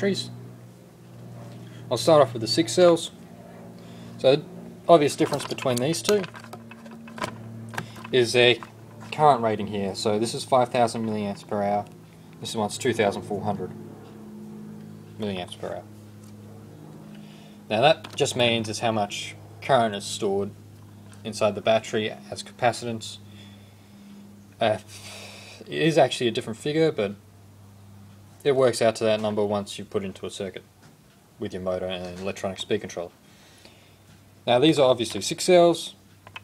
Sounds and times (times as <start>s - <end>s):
Speech: 0.0s - 0.3s, 1.9s - 3.2s, 4.2s - 6.3s, 8.1s - 13.7s, 15.2s - 15.9s, 17.7s - 20.6s, 21.2s - 23.2s, 24.6s - 24.9s, 25.7s - 27.2s, 28.4s - 30.7s, 31.4s - 33.1s, 34.4s - 36.0s.